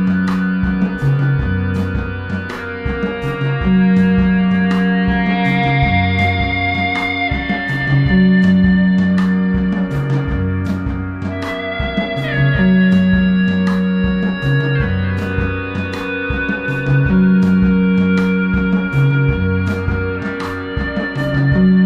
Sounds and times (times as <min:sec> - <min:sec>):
Acoustic guitar: 0:00.0 - 0:21.8
Ambient music: 0:00.0 - 0:21.8.